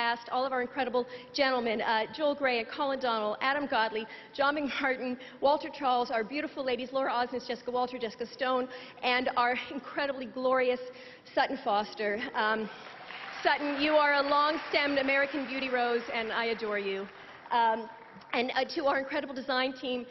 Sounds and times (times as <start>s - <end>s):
Female speech, woman speaking: 0.0s - 12.7s, 13.4s - 20.1s
Narration, monologue: 0.0s - 20.1s.